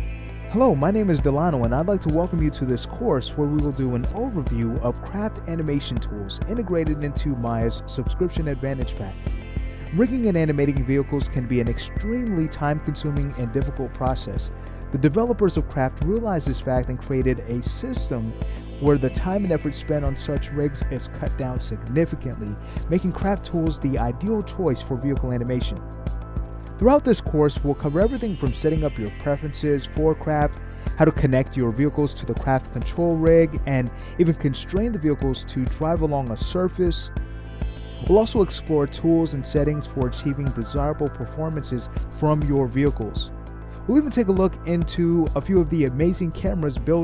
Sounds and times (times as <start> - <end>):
Music: 0.0 - 47.0
Speech: 0.5 - 9.2, 9.9 - 25.8, 26.8 - 37.1, 38.0 - 43.3, 43.9 - 47.0.